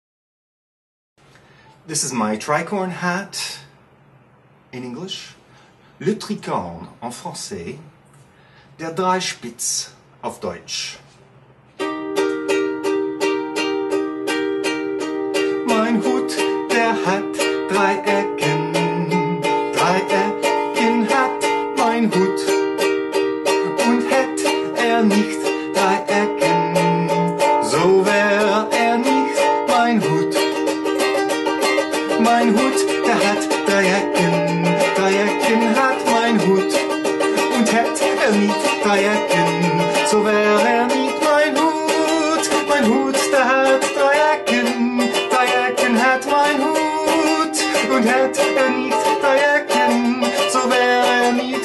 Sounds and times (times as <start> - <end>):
Ukulele: 11.7 - 51.6.